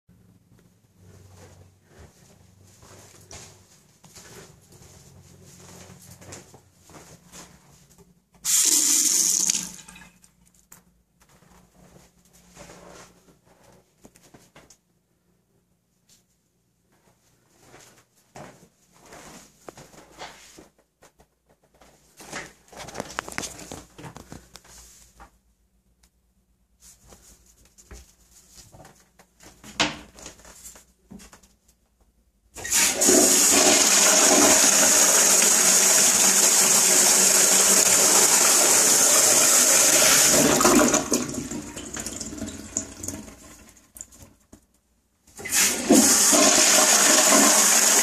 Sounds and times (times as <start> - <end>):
Water tap, faucet: 8.5 - 10.1, 32.6 - 44.2, 45.4 - 48.0.